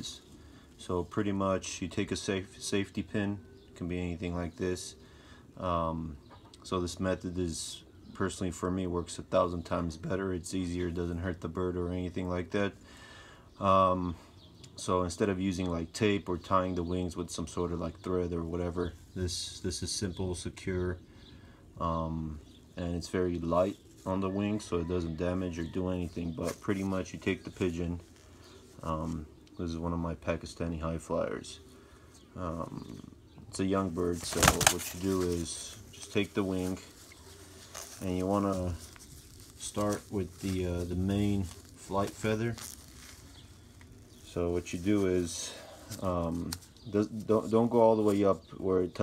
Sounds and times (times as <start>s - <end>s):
Speech: 0.0s - 5.0s, 5.6s - 12.8s, 13.6s - 14.2s, 14.8s - 21.0s, 21.8s - 28.1s, 28.8s - 31.6s, 32.4s - 37.0s, 38.0s - 38.9s, 39.6s - 42.7s, 44.3s - 49.0s.